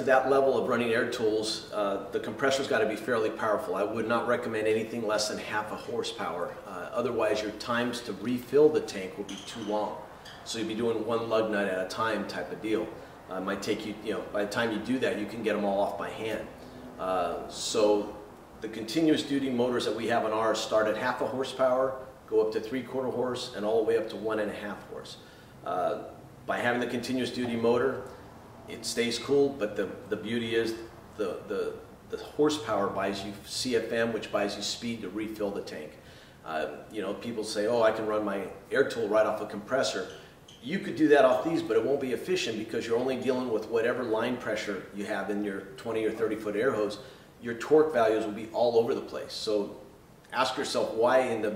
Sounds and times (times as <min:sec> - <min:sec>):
Speech: 0:00.0 - 0:28.1, 0:28.7 - 0:51.5.